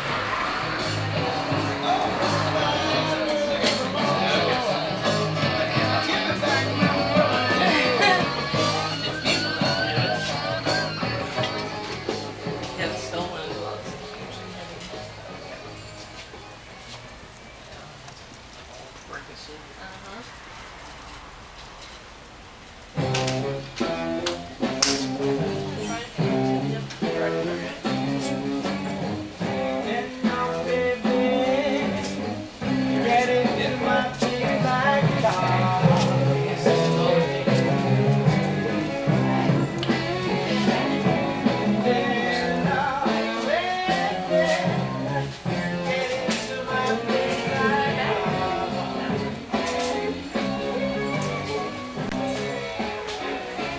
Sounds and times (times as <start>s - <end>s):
Music: 0.0s - 18.9s, 22.9s - 53.7s
Speech: 12.7s - 15.8s, 25.6s - 28.4s.